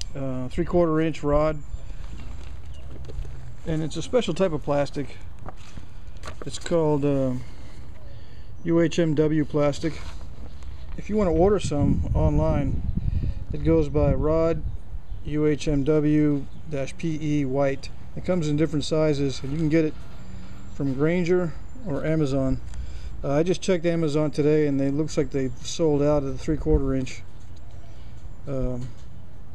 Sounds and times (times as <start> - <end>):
Speech: 0.1 - 1.6, 3.7 - 5.2, 6.4 - 7.4, 8.6 - 10.0, 11.0 - 12.8, 13.6 - 14.6, 15.3 - 20.0, 20.8 - 22.6, 23.2 - 27.2, 28.5 - 29.0.